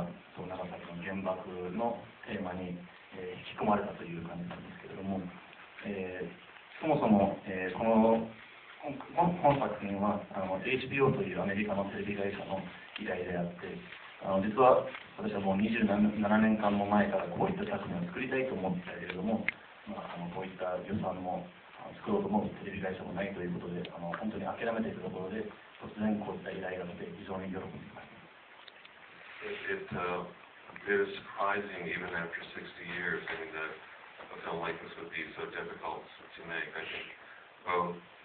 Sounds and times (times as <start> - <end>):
Speech: 0.0 - 28.2, 29.4 - 38.1.